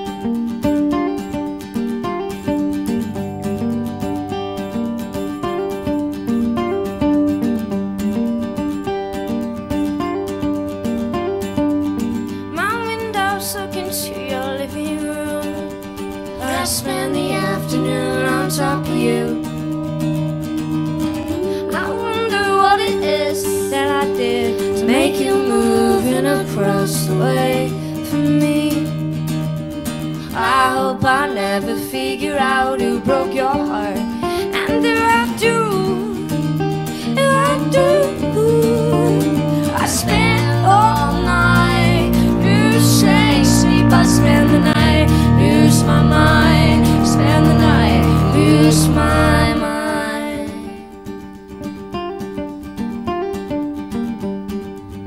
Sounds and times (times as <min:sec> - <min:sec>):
Music: 0:00.0 - 0:55.0.